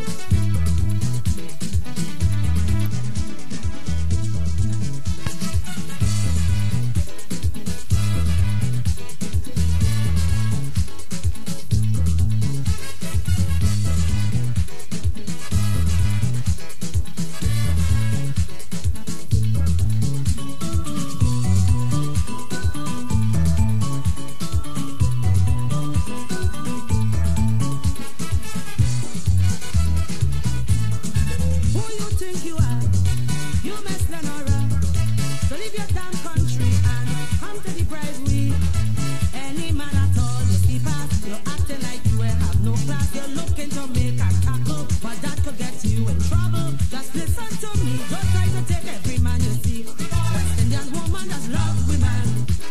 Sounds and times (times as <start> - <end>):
Music: 0.0 - 52.7.